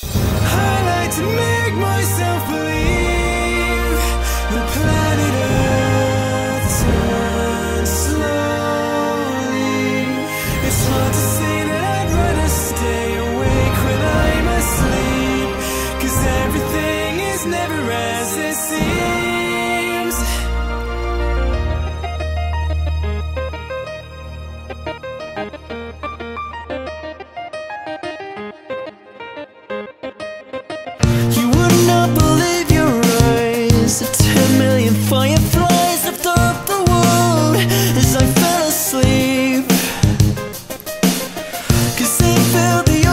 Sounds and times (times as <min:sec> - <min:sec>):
Music: 0:00.0 - 0:43.1.